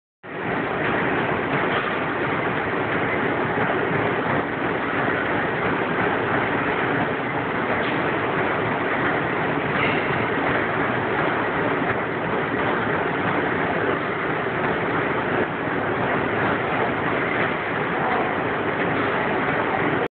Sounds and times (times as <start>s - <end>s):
Inside, large room or hall: 0.3s - 20.1s
Run: 0.4s - 20.1s.